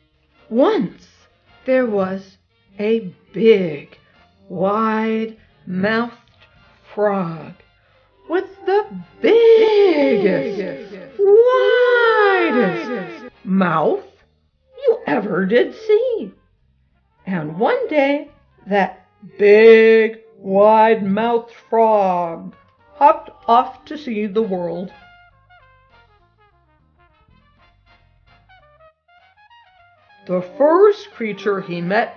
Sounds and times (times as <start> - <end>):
Music: 0.0 - 32.1
Speech: 0.5 - 1.1, 1.7 - 2.2, 2.8 - 3.9, 4.5 - 6.2, 7.0 - 7.6, 8.3 - 14.1, 14.8 - 16.4, 17.3 - 25.0, 30.3 - 32.1.